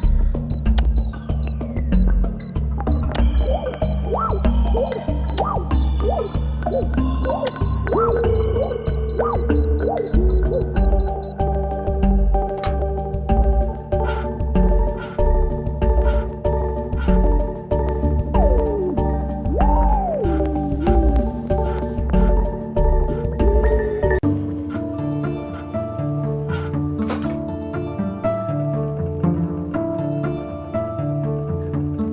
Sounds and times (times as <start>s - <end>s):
Video game music: 0.0s - 32.1s.